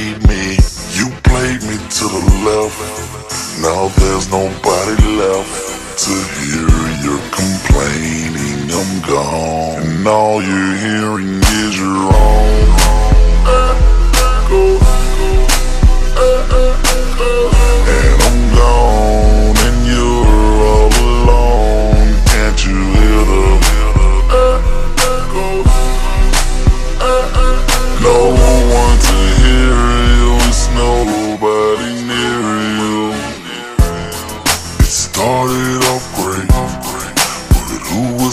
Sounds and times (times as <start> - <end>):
Music: 0.0 - 38.3.